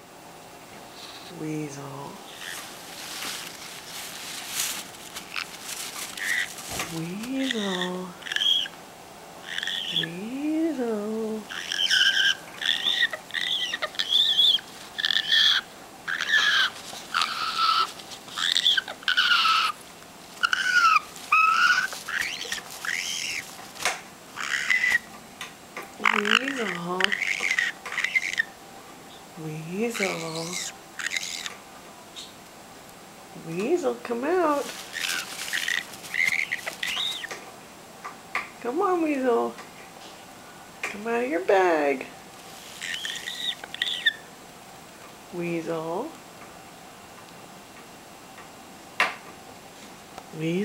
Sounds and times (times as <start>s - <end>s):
Speech: 1.3s - 2.4s, 6.9s - 8.2s, 10.0s - 11.5s, 26.0s - 27.2s, 29.4s - 30.7s, 33.4s - 34.7s, 38.6s - 39.6s, 40.9s - 42.1s, 45.3s - 46.2s, 50.3s - 50.6s
Bird: 11.5s - 19.8s, 20.4s - 23.5s, 24.4s - 25.1s, 26.0s - 28.5s, 34.9s - 37.4s, 42.8s - 44.3s.